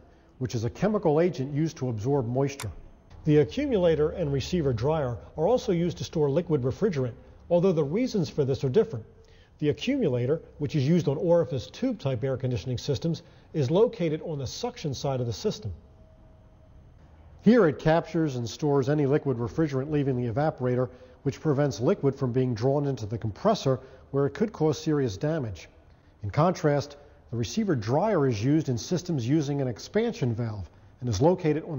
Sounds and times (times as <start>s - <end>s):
Speech: 0.0s - 15.8s, 17.4s - 31.7s.